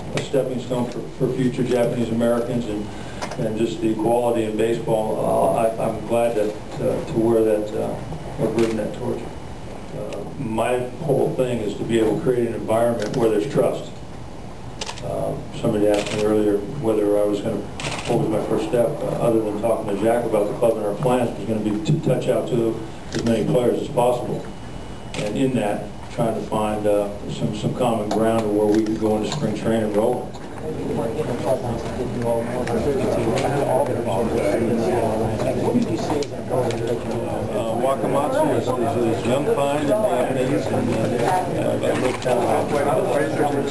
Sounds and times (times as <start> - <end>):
Speech: 0.0 - 9.3, 9.9 - 14.0, 15.0 - 24.5, 25.2 - 43.7
Inside, large room or hall: 0.0 - 43.7.